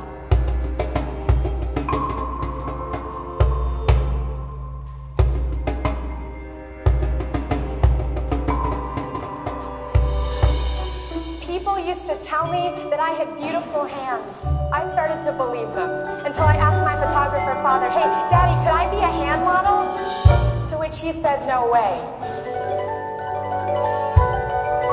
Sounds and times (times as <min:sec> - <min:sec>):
Percussion: 0:00.0 - 0:24.9
Speech: 0:11.4 - 0:20.0, 0:20.7 - 0:22.2.